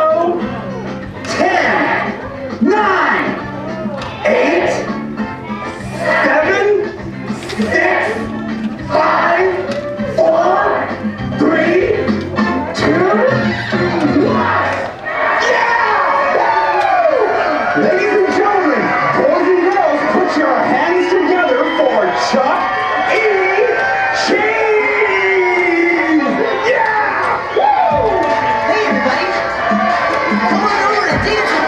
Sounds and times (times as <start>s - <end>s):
Crowd: 0.0s - 31.6s
Music: 0.0s - 31.6s
Speech: 5.8s - 8.2s, 10.2s - 12.1s, 17.8s - 27.2s, 30.4s - 31.6s.